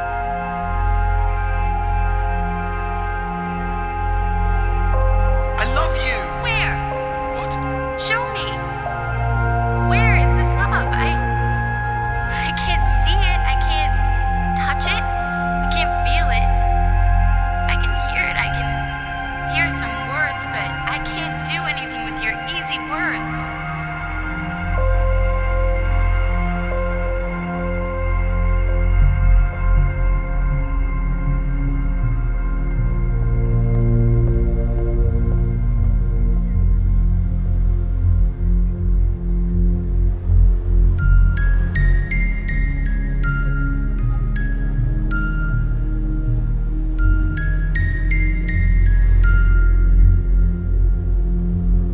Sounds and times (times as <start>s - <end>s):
Music: 0.0s - 51.9s
Speech: 5.6s - 8.6s, 12.3s - 14.0s, 14.6s - 15.1s, 15.7s - 16.5s, 17.7s - 18.8s, 19.5s - 23.5s.